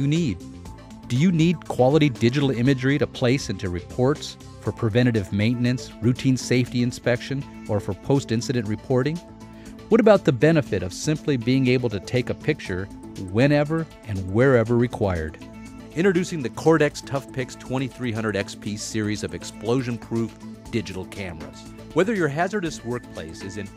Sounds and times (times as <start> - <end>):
Speech: 0.0 - 0.4, 1.1 - 9.2, 9.9 - 15.4, 16.0 - 23.7
Music: 0.0 - 23.7.